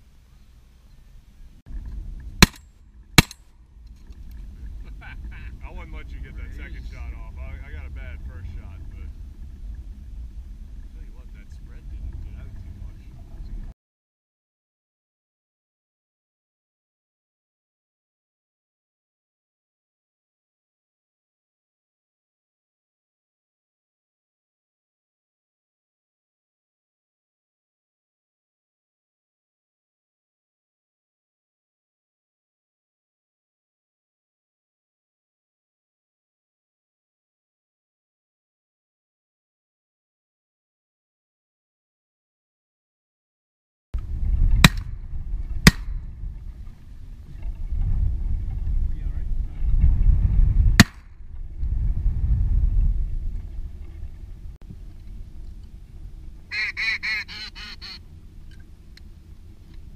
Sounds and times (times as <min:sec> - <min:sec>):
Speech: 0:04.9 - 0:09.1, 0:10.9 - 0:13.7, 0:48.9 - 0:49.7.